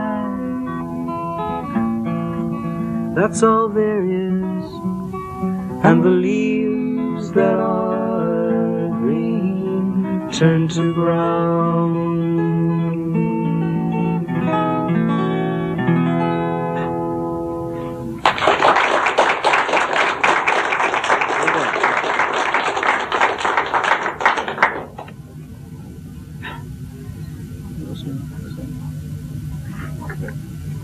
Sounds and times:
Music: 0.0s - 18.9s
Singing: 5.8s - 13.0s.

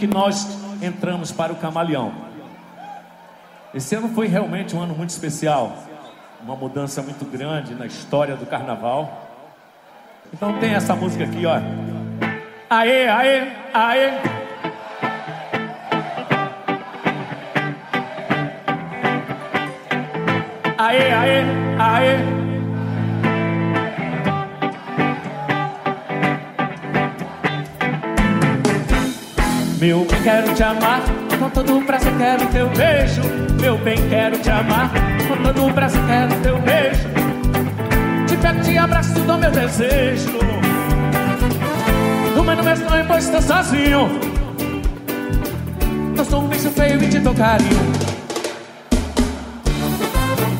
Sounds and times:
Music: 10.4s - 50.5s.

